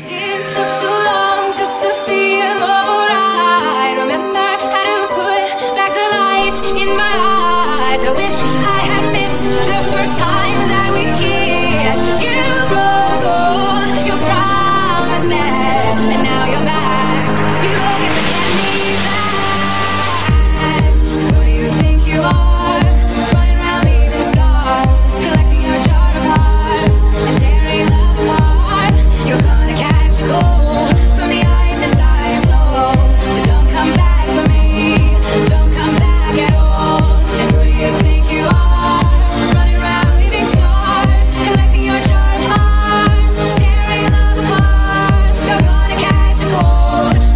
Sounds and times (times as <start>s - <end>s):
Music: 0.0s - 47.3s.